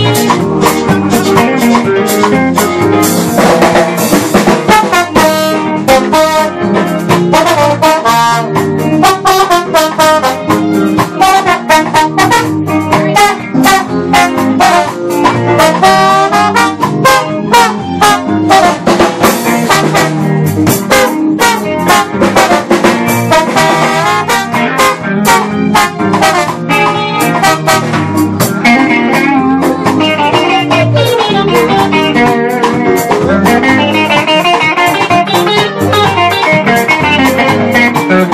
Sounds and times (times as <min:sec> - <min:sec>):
Jazz: 0:00.0 - 0:38.3.